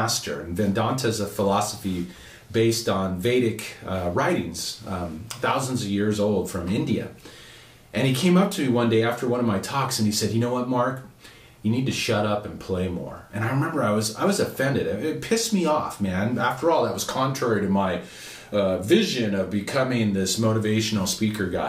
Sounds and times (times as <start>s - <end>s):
Speech: 0.0s - 7.2s, 7.9s - 21.6s.